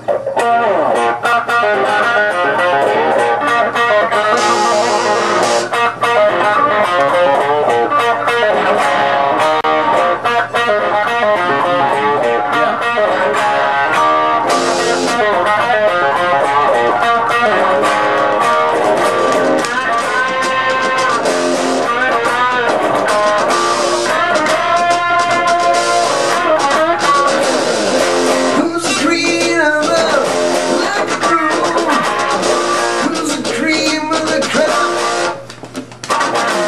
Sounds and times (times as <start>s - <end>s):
Bass guitar: 0.0s - 36.6s
Strum: 0.4s - 35.4s.